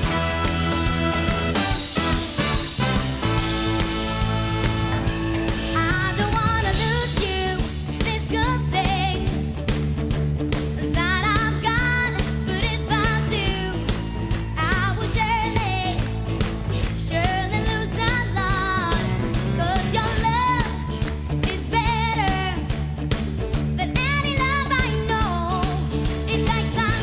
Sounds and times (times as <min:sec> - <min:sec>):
Music: 0:00.0 - 0:27.0.